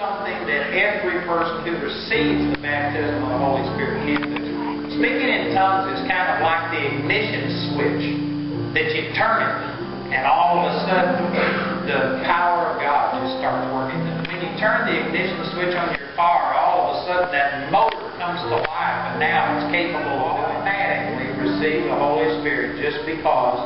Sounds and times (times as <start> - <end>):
Speech: 0.0 - 8.2, 8.8 - 23.6
Music: 0.0 - 23.6.